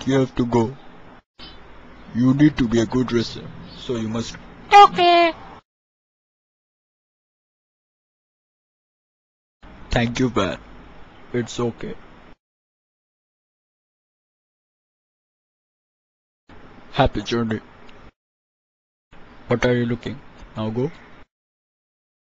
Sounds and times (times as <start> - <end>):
Speech: 0.0 - 0.8, 2.1 - 5.4, 9.9 - 10.6, 11.3 - 12.0, 17.0 - 17.6, 19.5 - 21.0.